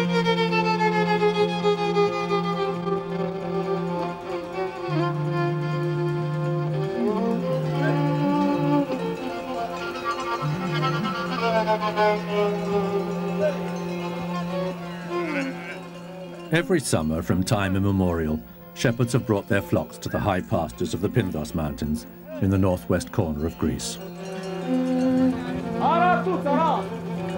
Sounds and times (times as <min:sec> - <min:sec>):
Music: 0:00.0 - 0:27.3
Speech: 0:16.5 - 0:24.0, 0:25.8 - 0:26.9.